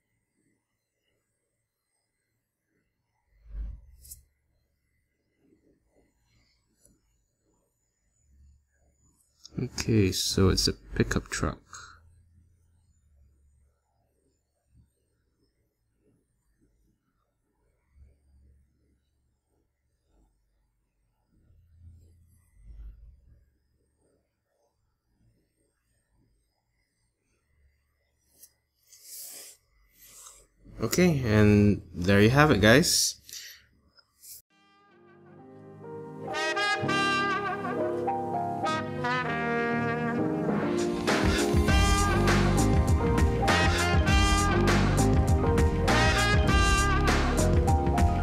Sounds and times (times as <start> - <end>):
Silence: 0.0 - 9.8, 11.8 - 31.0.